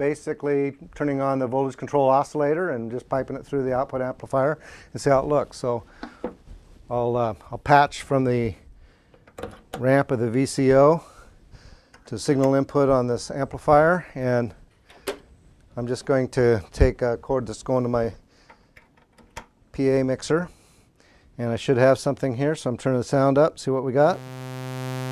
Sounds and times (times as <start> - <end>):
Speech: 0.0 - 5.9, 6.9 - 8.6, 9.8 - 11.2, 12.1 - 14.6, 15.8 - 18.2, 19.8 - 20.6, 21.4 - 24.2.